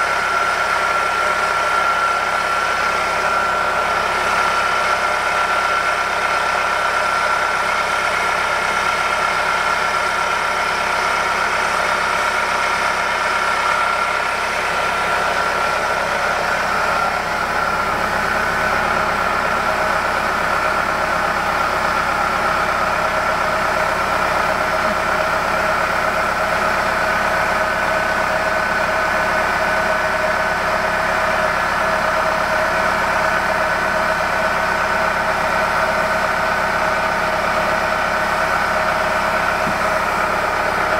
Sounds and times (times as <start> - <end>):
Bus: 0.0 - 40.9.